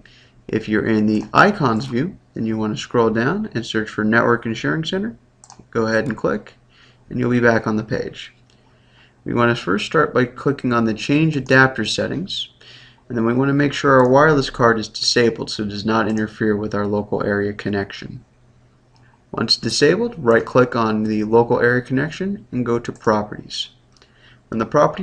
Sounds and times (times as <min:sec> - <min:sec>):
Speech: 0:00.5 - 0:08.4, 0:09.2 - 0:18.3, 0:19.3 - 0:23.8, 0:24.5 - 0:25.0.